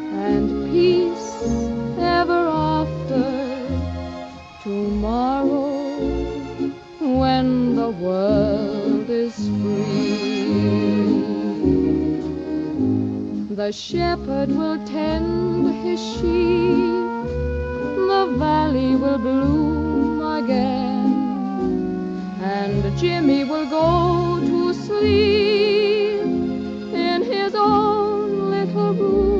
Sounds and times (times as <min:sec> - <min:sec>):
Vocal music: 0:00.0 - 0:29.3.